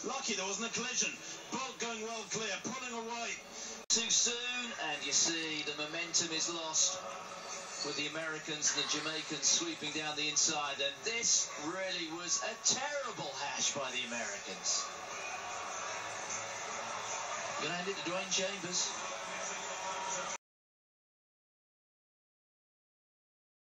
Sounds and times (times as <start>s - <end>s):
Speech: 0.0s - 7.0s, 7.8s - 14.9s, 17.6s - 19.0s.